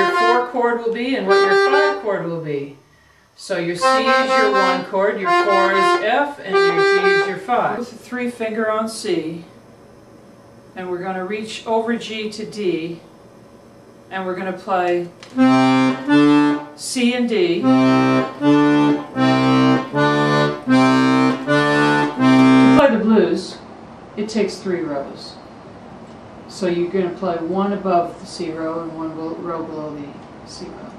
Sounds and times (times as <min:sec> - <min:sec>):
Accordion: 0:00.0 - 0:02.3, 0:03.7 - 0:07.8, 0:15.4 - 0:16.7, 0:17.6 - 0:22.9
Speech: 0:00.0 - 0:02.8, 0:03.4 - 0:09.5, 0:10.8 - 0:13.1, 0:14.1 - 0:15.1, 0:16.8 - 0:17.7, 0:22.8 - 0:25.5, 0:26.5 - 0:30.9.